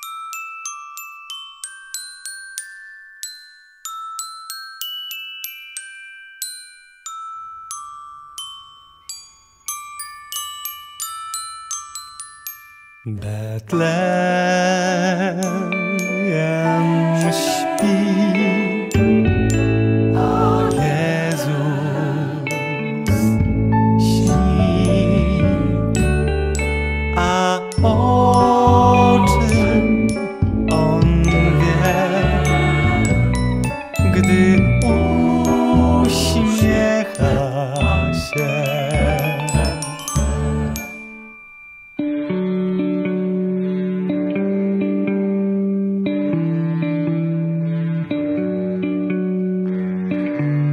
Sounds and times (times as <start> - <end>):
Marimba, xylophone: 0.0 - 13.2, 15.1 - 42.7
Glockenspiel: 0.0 - 50.5.